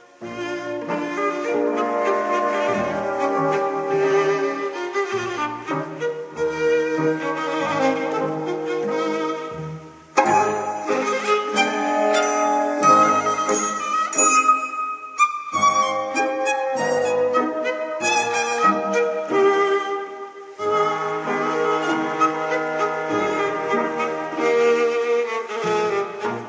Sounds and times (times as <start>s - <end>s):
Tender music: 10.2s - 20.1s.